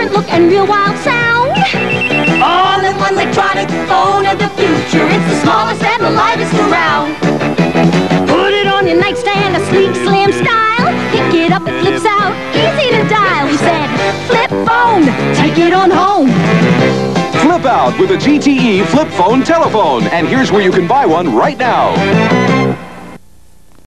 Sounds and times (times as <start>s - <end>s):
Music: 0.0s - 23.2s
Speech: 17.4s - 22.0s.